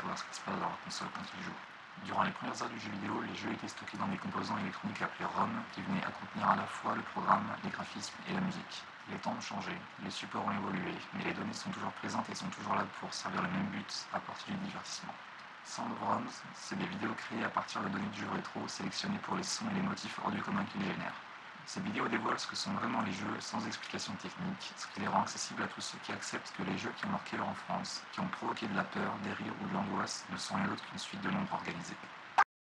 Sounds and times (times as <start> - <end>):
Speech: 0.0 - 32.2.